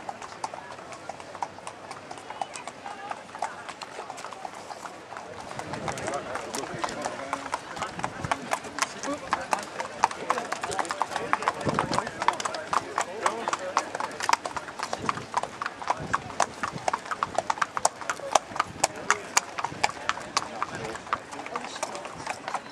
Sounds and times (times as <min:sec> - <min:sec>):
Clip-clop: 0:00.0 - 0:22.7
Speech: 0:02.0 - 0:16.7, 0:17.8 - 0:22.7.